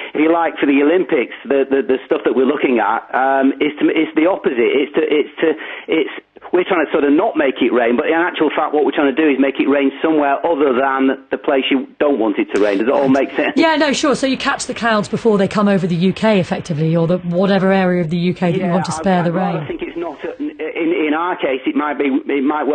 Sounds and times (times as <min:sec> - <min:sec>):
Speech: 0:00.1 - 0:22.7.